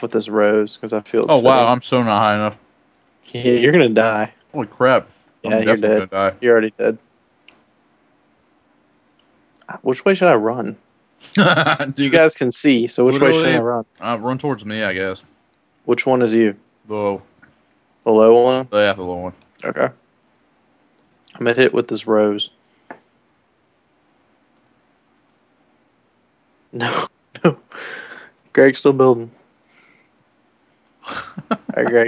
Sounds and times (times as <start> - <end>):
Speech: 0.0 - 2.6, 3.3 - 7.0, 9.7 - 10.8, 11.4 - 15.2, 15.9 - 17.2, 18.1 - 20.0, 21.3 - 22.5, 26.8 - 28.0, 28.6 - 29.4, 31.1 - 32.0.